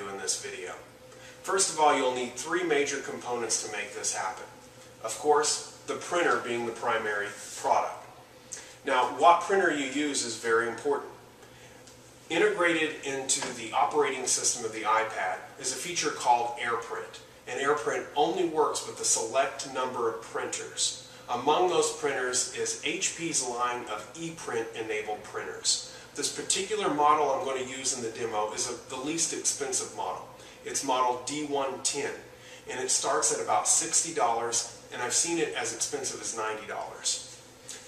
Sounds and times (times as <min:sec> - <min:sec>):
Speech: 0:00.0 - 0:08.2, 0:08.8 - 0:11.2, 0:12.3 - 0:37.3.